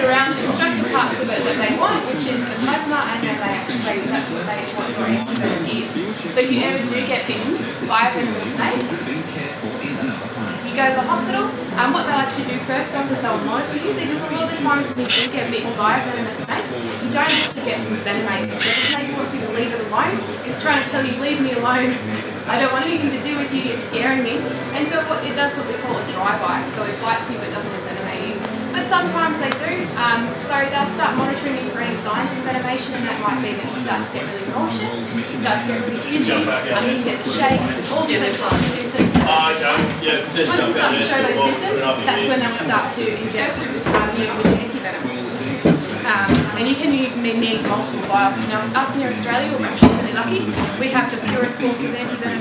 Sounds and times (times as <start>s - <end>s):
Inside, large room or hall: 0.0s - 52.4s
Speech: 0.0s - 52.4s.